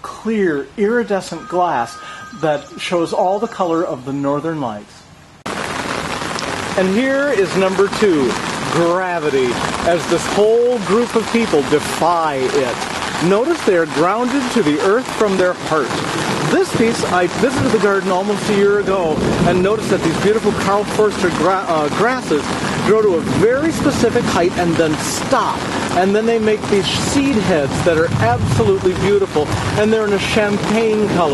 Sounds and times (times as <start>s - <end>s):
Speech: 0.0s - 5.1s, 6.8s - 31.3s.